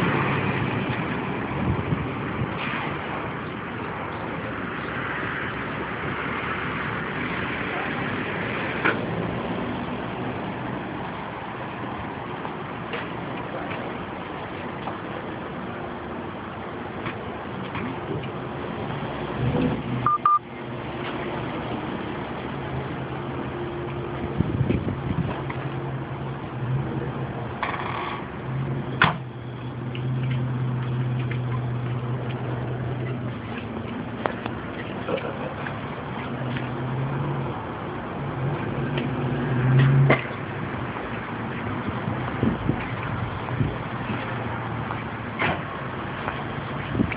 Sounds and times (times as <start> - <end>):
Car: 0.0 - 47.1.